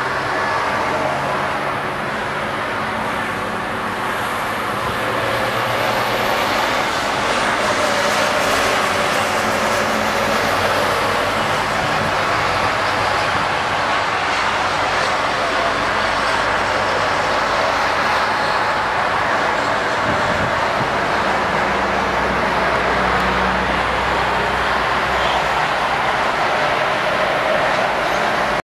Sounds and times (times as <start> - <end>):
Sailboat, sailing ship: 0.0 - 28.6.